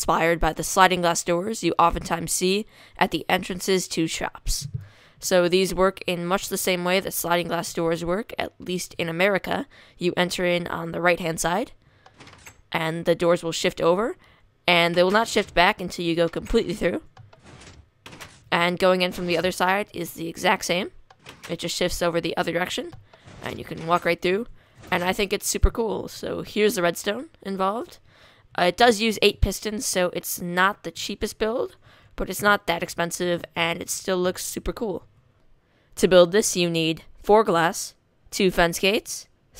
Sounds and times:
Speech: 0.0 - 11.8, 12.8 - 17.1, 18.6 - 28.0, 28.6 - 35.0, 36.0 - 39.3.

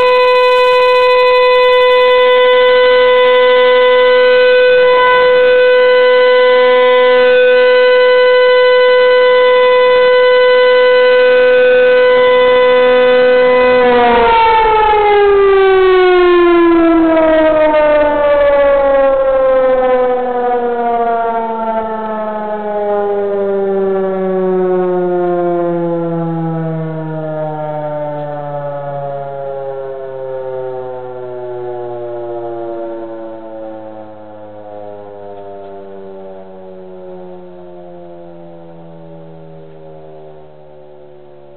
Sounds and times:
Civil defense siren: 0.0 - 41.5.

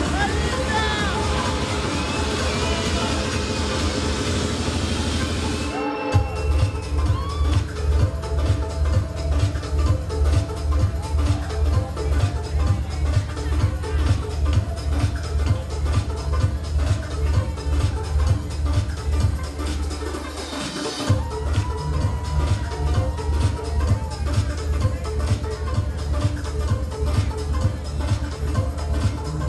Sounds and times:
House music: 0.0 - 29.4.

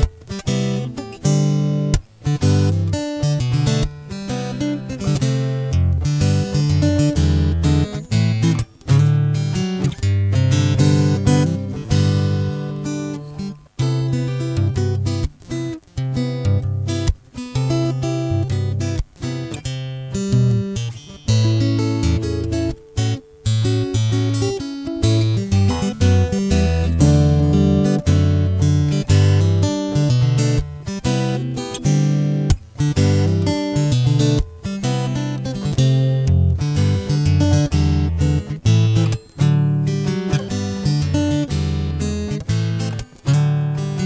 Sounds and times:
Acoustic guitar: 0.0 - 44.0
Electric guitar: 0.0 - 44.0
Strum: 0.0 - 44.0.

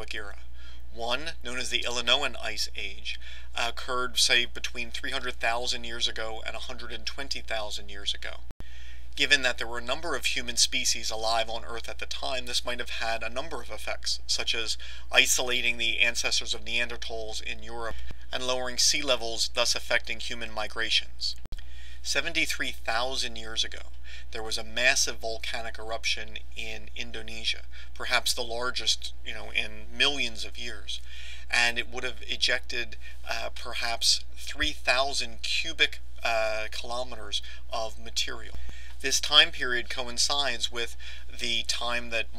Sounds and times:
Speech: 0.0 - 8.5, 9.2 - 21.4, 22.0 - 42.3.

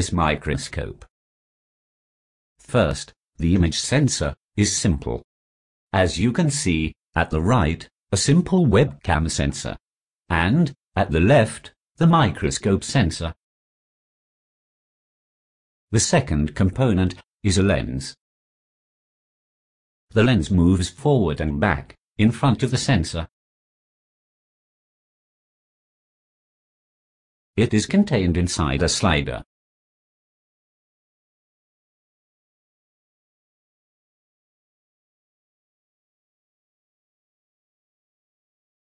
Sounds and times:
Speech: 0.0 - 1.1, 2.6 - 5.3, 6.0 - 13.4, 16.0 - 18.2, 20.1 - 23.4, 27.6 - 29.5.

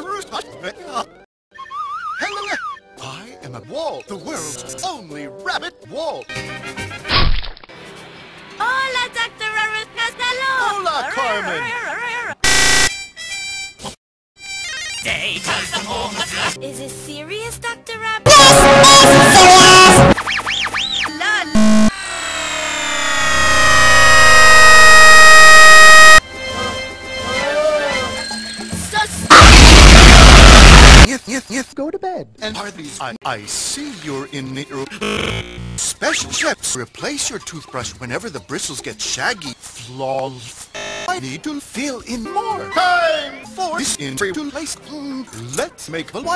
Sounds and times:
Music: 2.2 - 7.1, 7.7 - 10.8, 14.4 - 21.0, 26.2 - 29.3, 42.1 - 46.3.

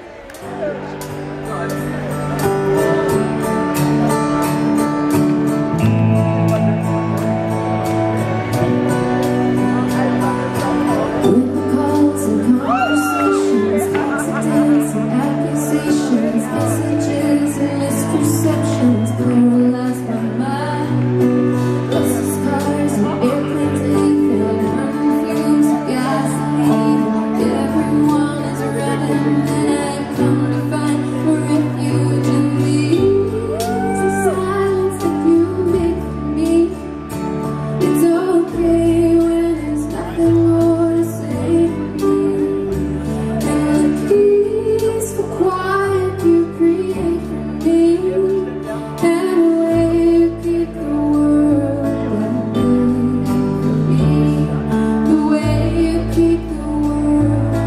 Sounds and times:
Bluegrass: 0.0 - 57.6.

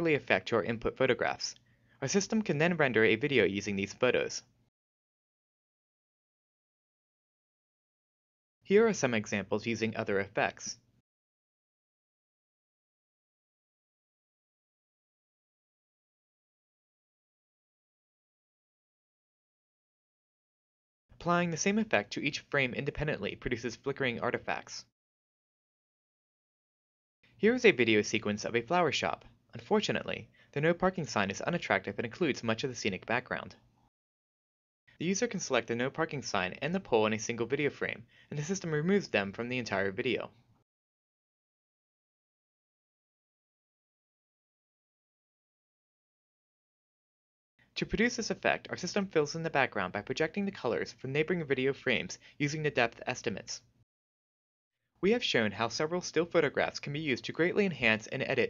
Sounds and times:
Speech: 0.0 - 4.6, 8.7 - 10.9, 21.2 - 24.9, 27.4 - 33.6, 35.0 - 40.4, 47.8 - 53.7, 55.0 - 58.4.

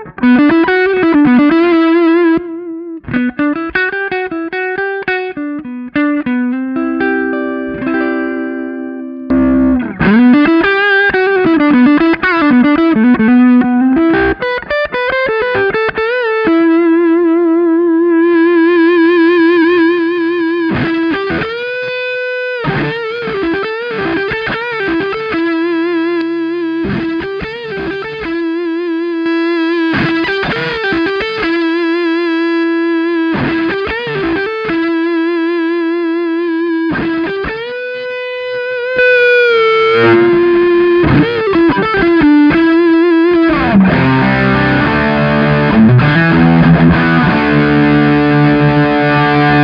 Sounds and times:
Distortion: 0.0 - 49.6
Effects unit: 0.0 - 49.6
Guitar: 0.0 - 49.6.

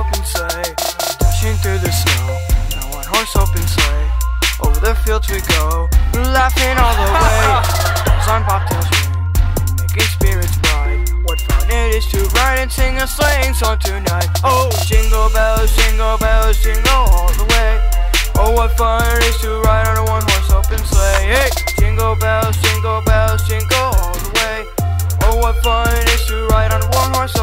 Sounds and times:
Music: 0.0 - 27.4.

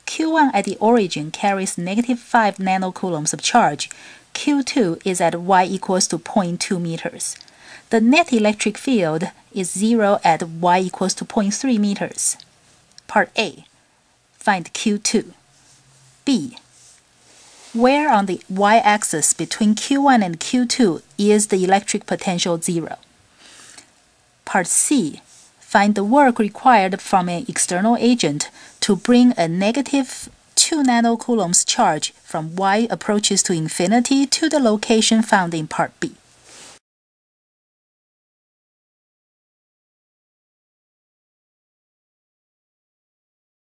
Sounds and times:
Speech: 0.1 - 12.4, 13.0 - 13.7, 14.4 - 15.4, 16.2 - 16.7, 17.7 - 23.0, 24.4 - 36.2.

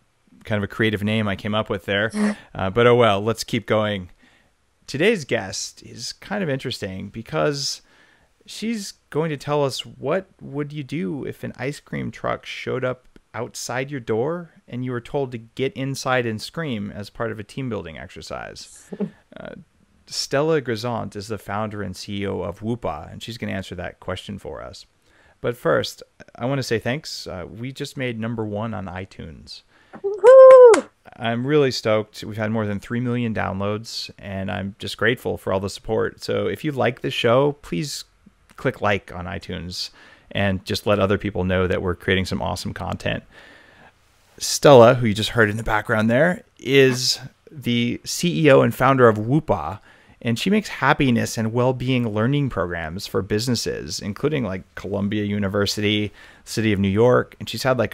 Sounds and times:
Speech: 0.4 - 4.2, 4.9 - 7.9, 8.5 - 30.3, 31.0 - 43.3, 44.4 - 57.9.

